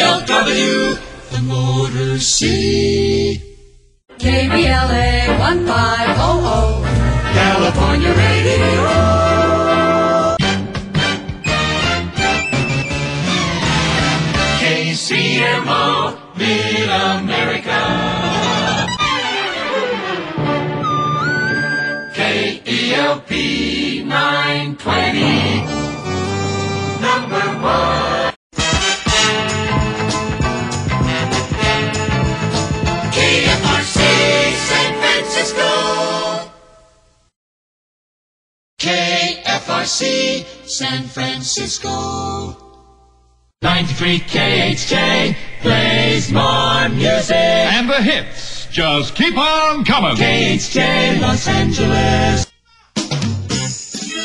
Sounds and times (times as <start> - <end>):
Music: 0.0 - 37.3, 38.8 - 47.8, 50.0 - 54.2.